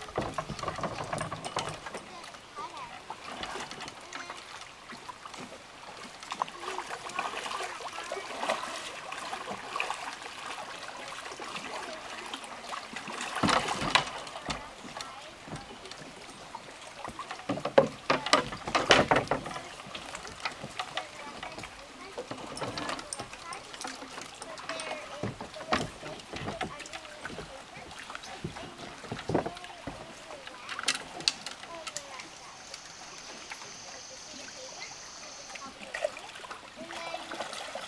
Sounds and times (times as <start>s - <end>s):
Rowboat, canoe, kayak: 0.0s - 37.8s.